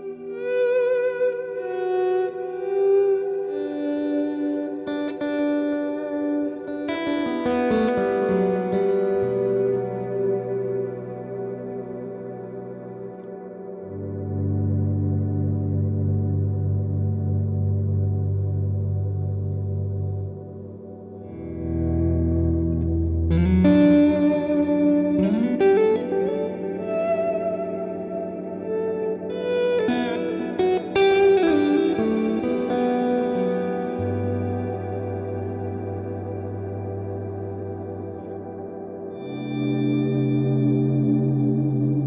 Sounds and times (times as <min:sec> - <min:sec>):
Bass guitar: 0:13.9 - 0:20.7, 0:21.5 - 0:25.9, 0:39.5 - 0:42.0.